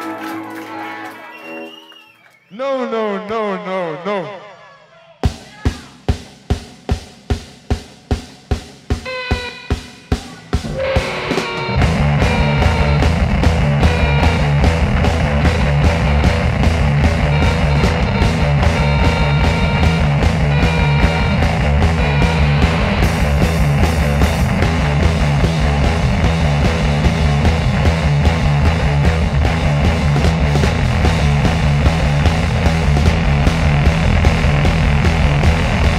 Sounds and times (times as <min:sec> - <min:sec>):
Music: 0:00.0 - 0:02.2, 0:05.2 - 0:35.9.